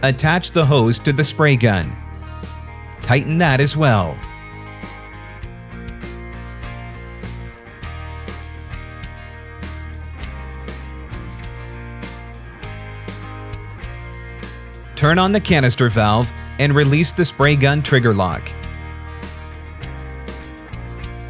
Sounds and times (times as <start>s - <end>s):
Speech: 0.0s - 2.0s, 3.1s - 4.2s, 15.0s - 18.5s
Music: 0.0s - 21.3s.